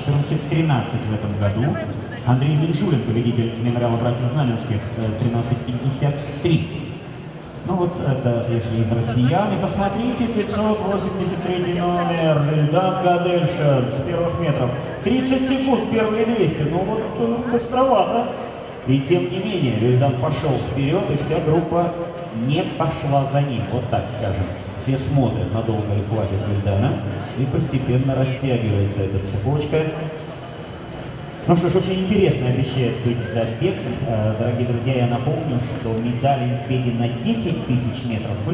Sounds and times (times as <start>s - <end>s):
Speech: 0.0s - 7.0s, 7.6s - 30.2s, 31.4s - 38.5s
Music: 0.0s - 38.5s
Outside, urban or manmade: 0.0s - 38.5s.